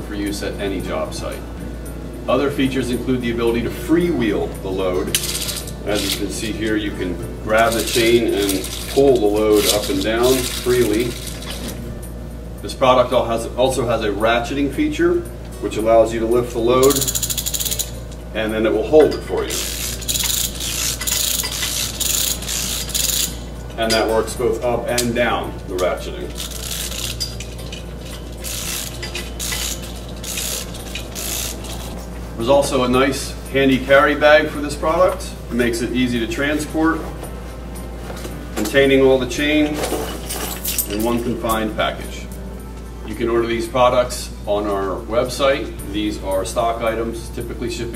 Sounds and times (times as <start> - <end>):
Gears: 5.2 - 6.3, 7.6 - 11.8, 16.8 - 18.0, 19.4 - 23.4, 26.3 - 32.0
Ratchet, pawl: 7.6 - 11.8, 16.8 - 17.9, 19.5 - 23.5, 26.3 - 32.0.